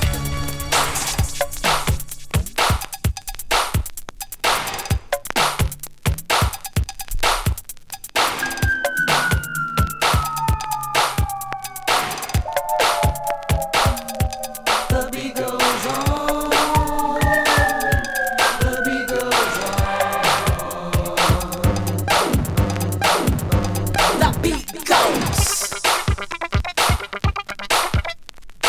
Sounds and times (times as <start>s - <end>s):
Scratching (performance technique): 0.0s - 28.6s.